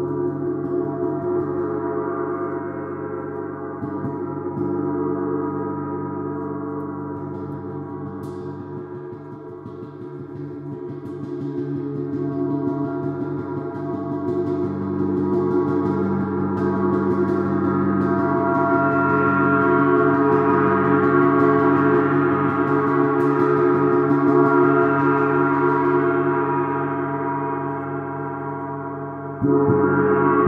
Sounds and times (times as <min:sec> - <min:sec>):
Gong: 0:00.0 - 0:30.4.